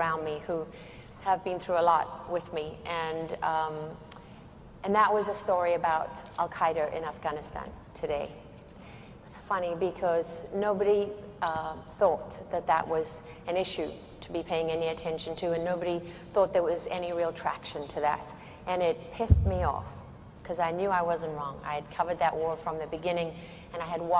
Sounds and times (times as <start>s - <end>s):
Female speech, woman speaking: 0.0s - 0.7s, 1.3s - 4.0s, 4.8s - 8.4s, 9.3s - 24.1s
Narration, monologue: 0.0s - 24.1s.